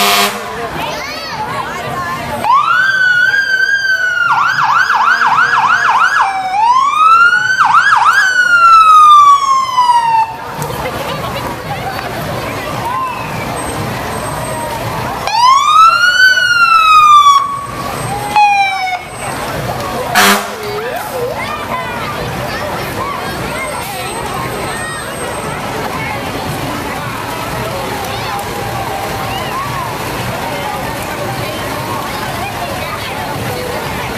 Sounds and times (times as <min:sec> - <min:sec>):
Truck: 0:00.0 - 0:34.1
Fire engine, fire truck (siren): 0:02.4 - 0:10.7, 0:12.8 - 0:21.3.